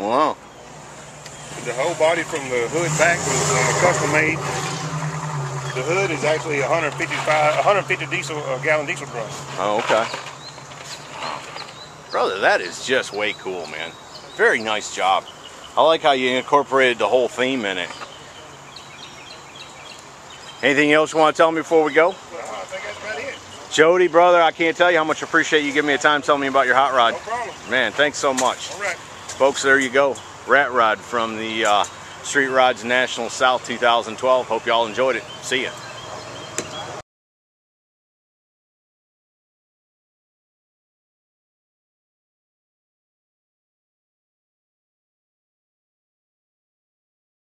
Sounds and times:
Speech: 0.0s - 0.4s, 1.6s - 4.4s, 5.7s - 10.1s, 12.1s - 15.2s, 15.8s - 18.0s, 20.6s - 35.8s
Truck: 0.0s - 11.9s
Outside, rural or natural: 0.0s - 37.0s.

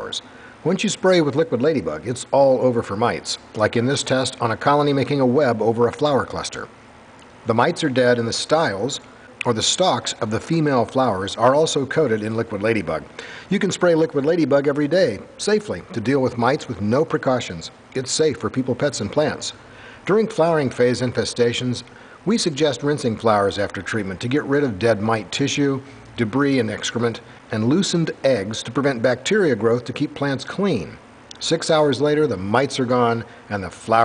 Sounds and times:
Speech: 0.0s - 6.7s, 7.4s - 34.0s.

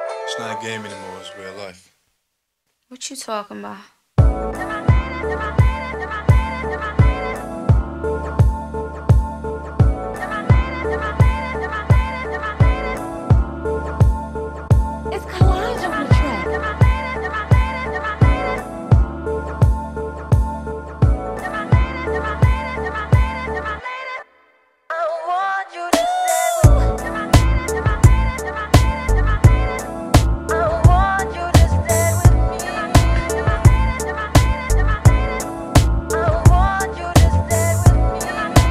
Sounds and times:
Music: 0.0s - 1.8s, 4.2s - 38.7s.

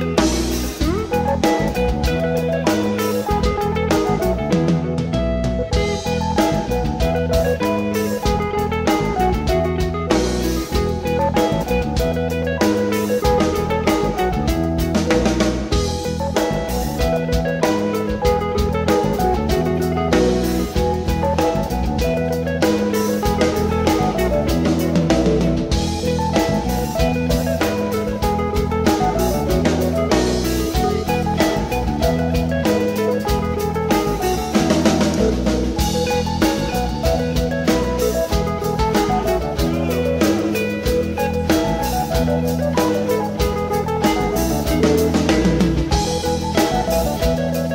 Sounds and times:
Music: 0.0s - 47.7s.

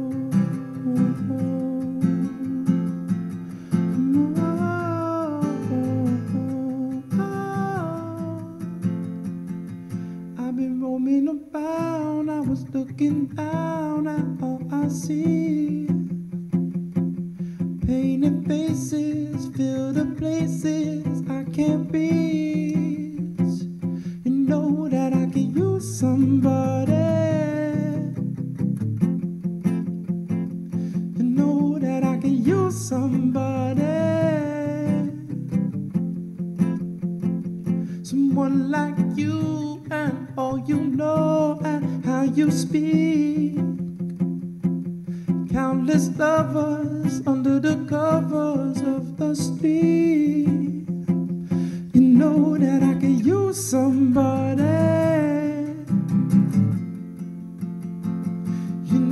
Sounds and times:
Music: 0.0s - 59.1s.

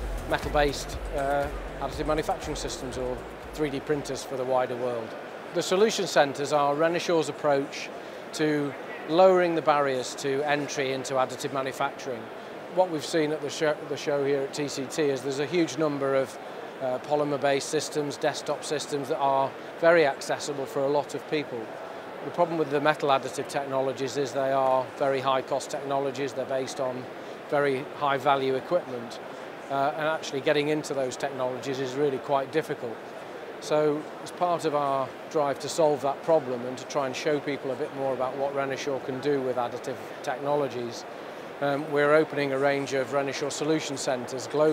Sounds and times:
Speech: 0.3s - 33.0s, 33.6s - 44.7s.

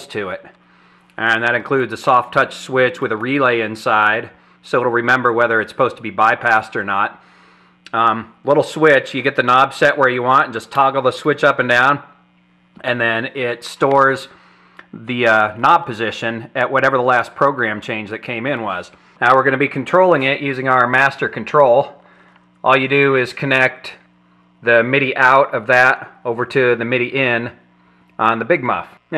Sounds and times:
Speech: 0.0s - 0.6s, 1.2s - 7.2s, 7.9s - 12.2s, 12.8s - 22.0s, 22.6s - 29.1s.

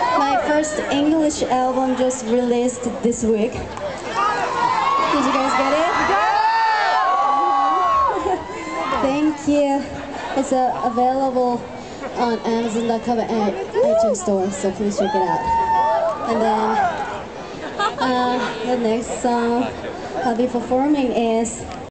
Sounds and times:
Speech: 16.3s - 16.8s, 18.0s - 21.6s.

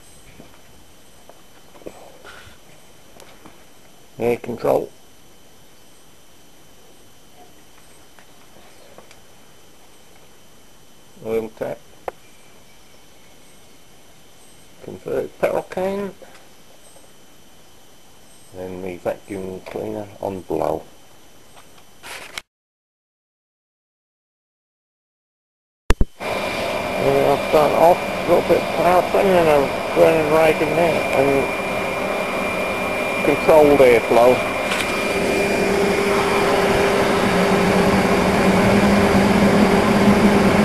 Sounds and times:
Speech: 4.2s - 5.0s, 11.2s - 11.8s, 14.8s - 16.3s, 18.6s - 20.9s, 27.0s - 31.5s, 33.2s - 34.4s.

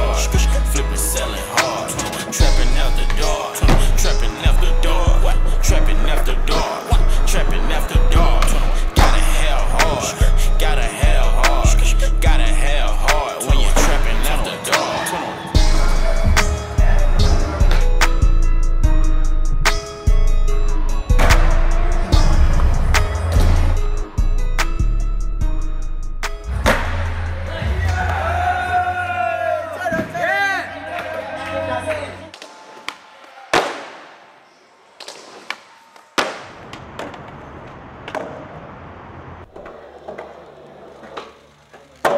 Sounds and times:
Skateboard: 35.0s - 42.1s.

